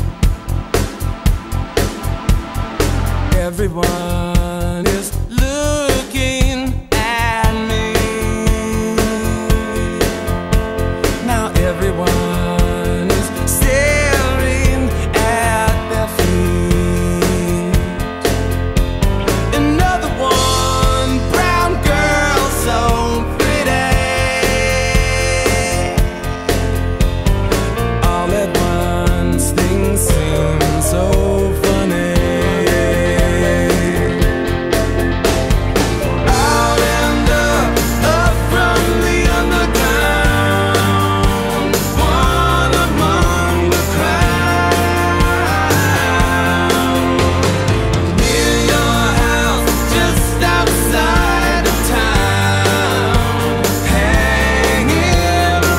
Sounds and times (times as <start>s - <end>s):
Music: 0.0s - 55.7s.